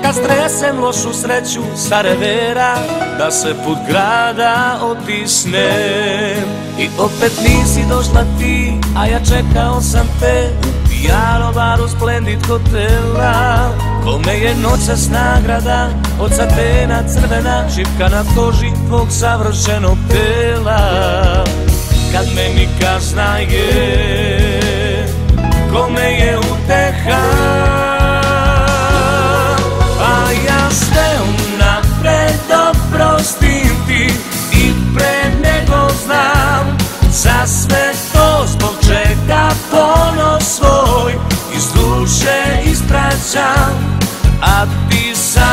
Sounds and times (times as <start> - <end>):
Sad music: 0.0 - 11.7, 13.0 - 19.6, 20.2 - 37.1.